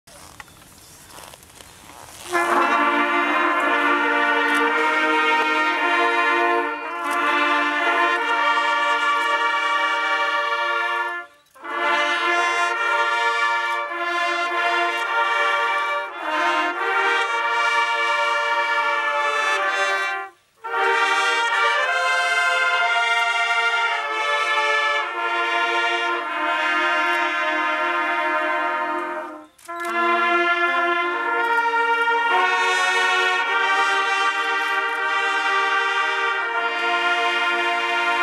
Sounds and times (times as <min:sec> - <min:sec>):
Outside, urban or manmade: 0:00.0 - 0:38.2
Music: 0:02.3 - 0:38.2.